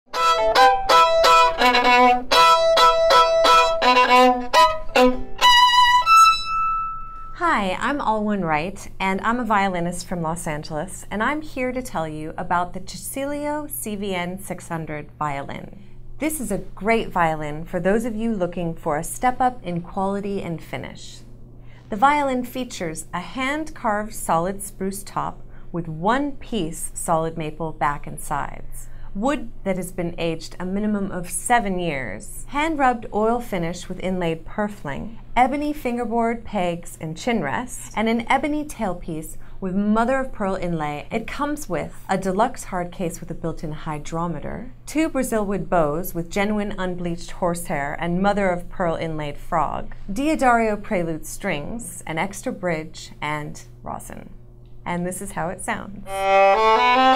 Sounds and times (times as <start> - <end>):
Speech: 7.4 - 21.3, 21.9 - 56.2.